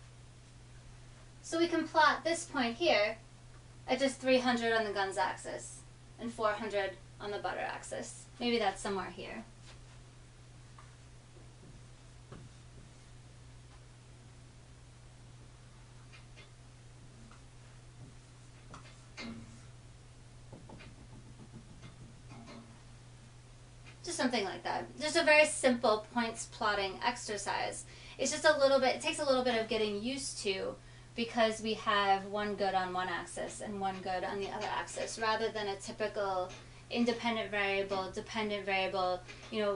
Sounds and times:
Inside, small room: 0.0s - 39.7s
Speech: 1.4s - 3.2s, 3.9s - 9.5s, 24.0s - 39.7s.

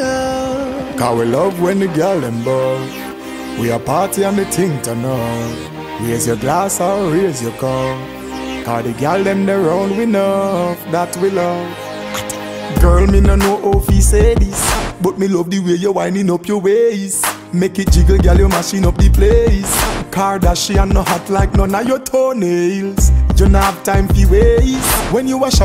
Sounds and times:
Music: 0.0s - 25.6s.

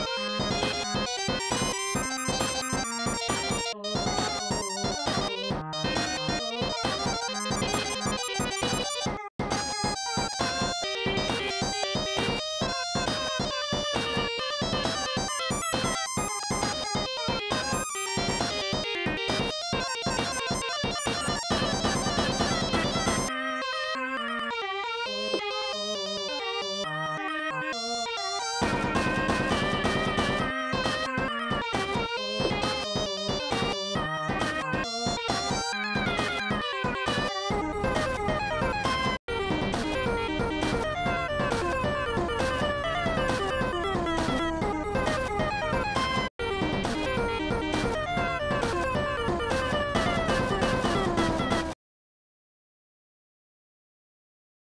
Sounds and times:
Background music: 0.0s - 51.7s.

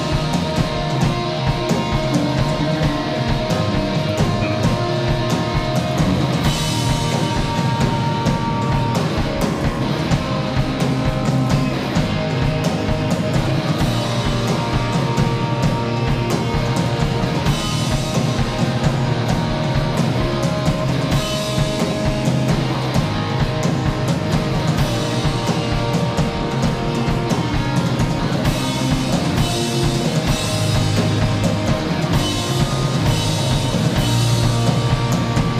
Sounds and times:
Music: 0.0s - 35.6s.

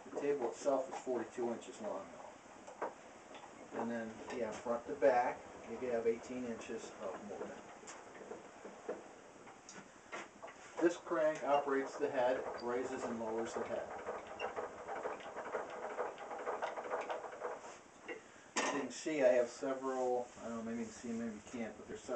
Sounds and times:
Speech: 0.1s - 2.2s, 3.8s - 7.7s, 10.8s - 14.0s, 18.7s - 22.1s.

